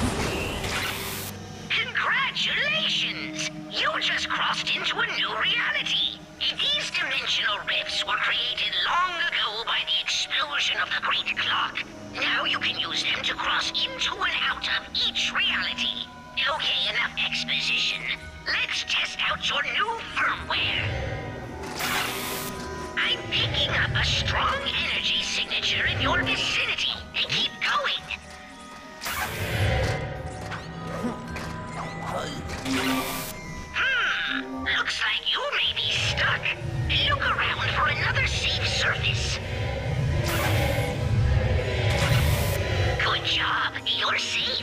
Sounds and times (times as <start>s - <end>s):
Music: 0.0s - 44.6s
Speech: 23.0s - 28.2s, 33.8s - 39.4s, 43.0s - 44.6s.